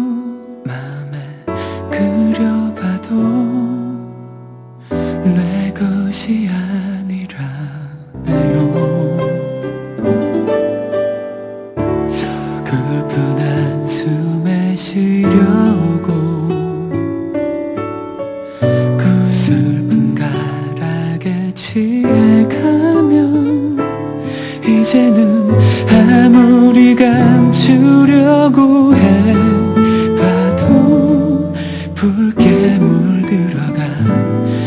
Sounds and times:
Tender music: 0.0 - 34.6.

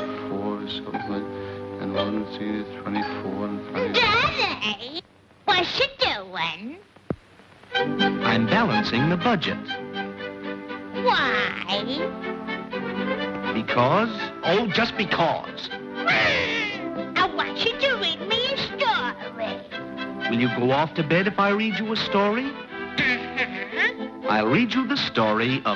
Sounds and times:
Music: 0.0 - 4.7, 7.6 - 25.7.

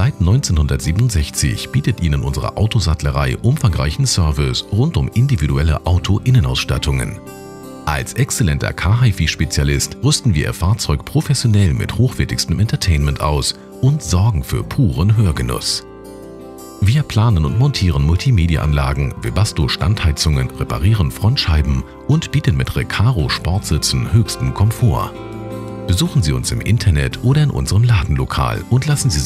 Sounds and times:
Speech: 0.0 - 7.2, 7.9 - 15.8, 16.8 - 25.1, 25.9 - 29.2
Music: 0.0 - 29.2.

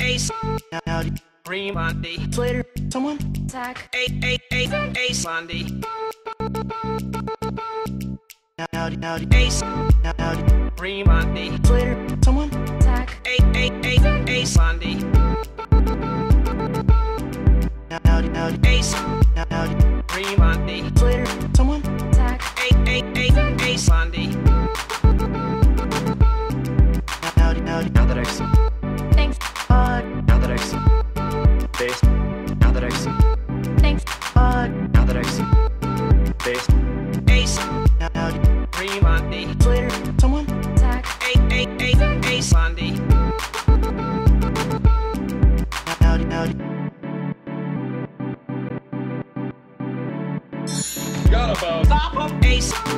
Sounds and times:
Music: 0.0 - 52.9.

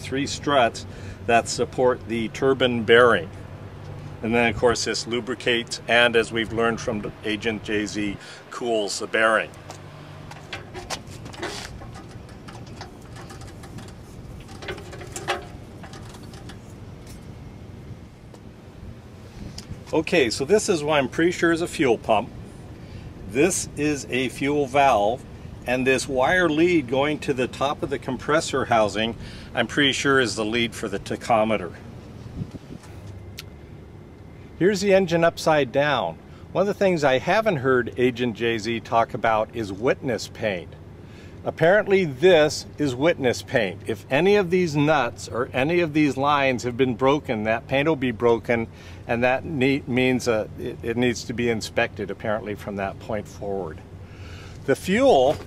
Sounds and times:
Speech: 0.0 - 3.3, 4.2 - 9.6, 19.9 - 22.3, 23.3 - 31.8, 34.6 - 40.8, 41.4 - 53.8, 54.6 - 55.4.

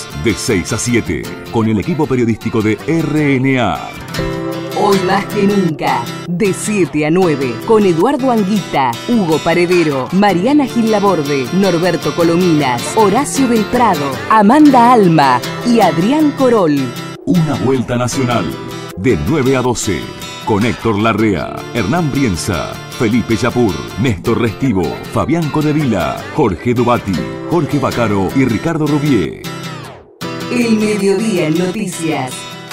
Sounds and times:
Speech: 0.0 - 4.0, 4.8 - 29.5, 30.5 - 32.4
Music: 0.0 - 32.7.

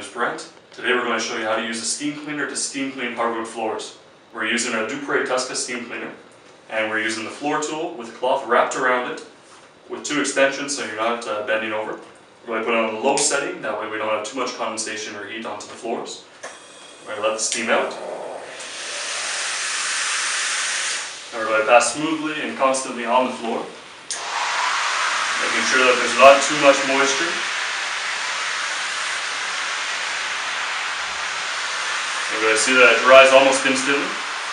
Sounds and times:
Speech: 0.0 - 16.3, 17.1 - 18.4, 21.4 - 23.8, 25.4 - 27.4, 32.3 - 34.2.

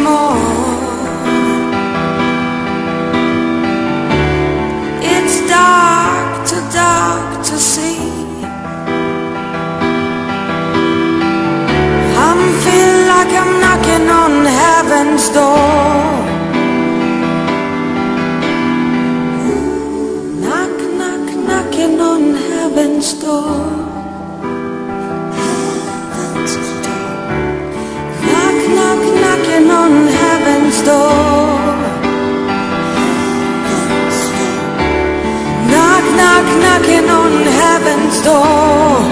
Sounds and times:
Music: 0.0 - 39.1.

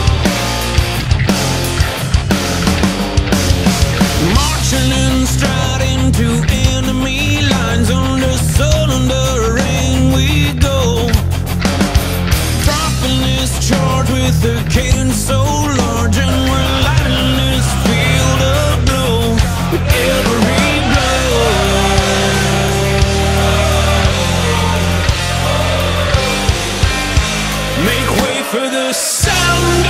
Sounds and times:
Music: 0.0 - 29.9.

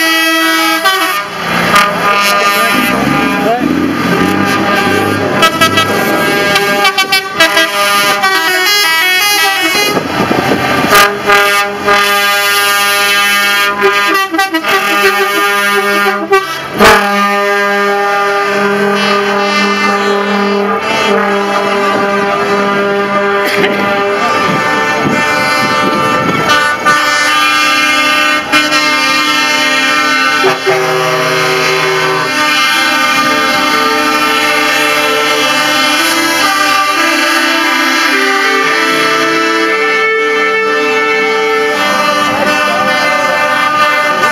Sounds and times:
Vehicle: 0.0 - 44.3.

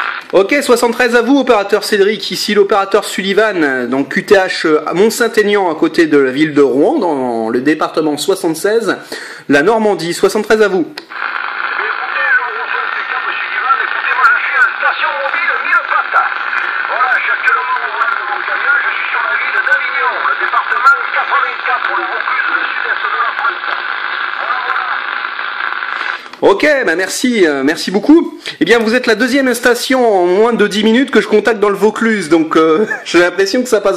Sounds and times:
Radio: 0.0 - 4.2, 10.9 - 28.0
Speech: 0.3 - 11.0, 11.8 - 25.0, 26.4 - 33.9.

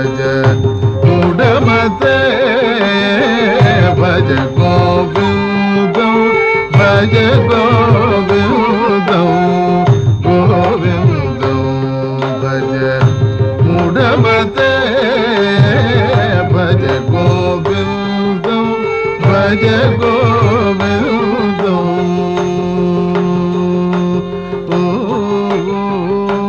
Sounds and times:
Music: 0.0 - 26.4.

